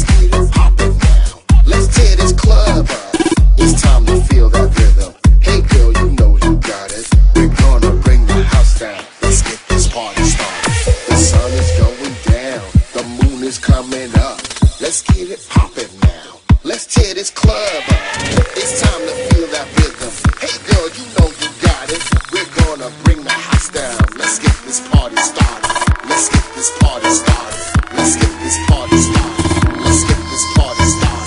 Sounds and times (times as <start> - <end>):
Music: 0.0 - 31.2.